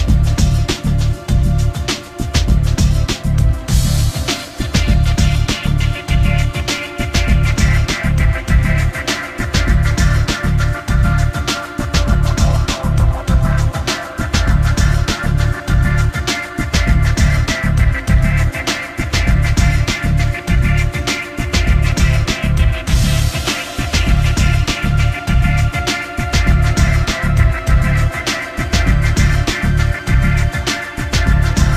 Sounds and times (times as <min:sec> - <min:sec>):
Music: 0:00.0 - 0:31.7.